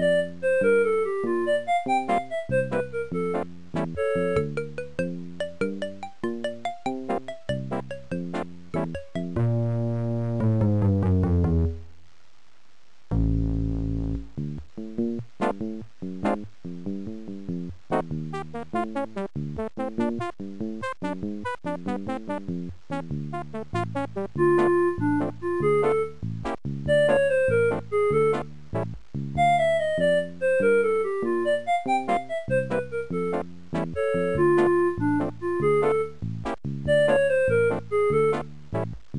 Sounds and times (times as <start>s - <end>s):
Music: 0.0s - 12.1s, 13.1s - 39.1s.